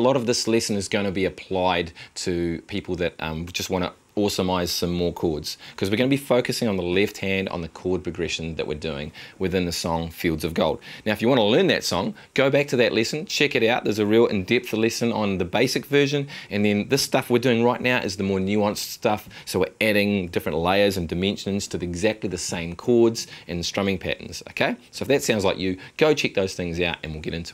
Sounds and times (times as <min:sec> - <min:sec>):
Speech: 0:00.0 - 0:27.5.